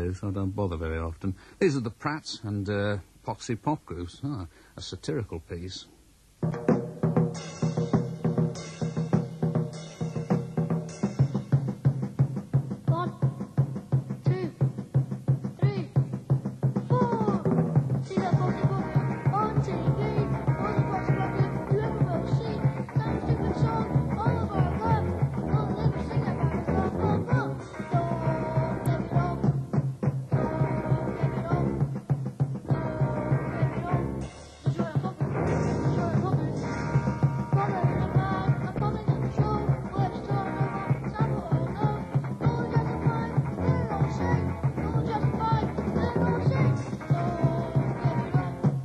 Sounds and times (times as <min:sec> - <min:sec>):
Speech: 0:00.0 - 0:06.0, 0:12.9 - 0:13.4, 0:14.2 - 0:14.7, 0:15.6 - 0:16.0, 0:16.9 - 0:17.5
Music: 0:06.2 - 0:48.8.